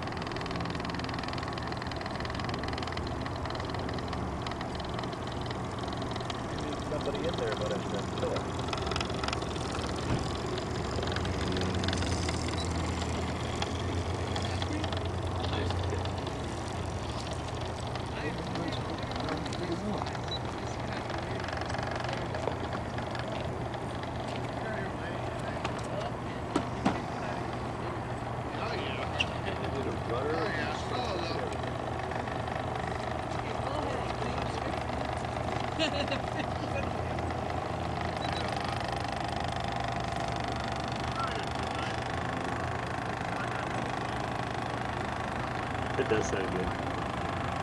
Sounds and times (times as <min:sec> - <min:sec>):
Motorboat, speedboat: 0:00.0 - 0:47.6.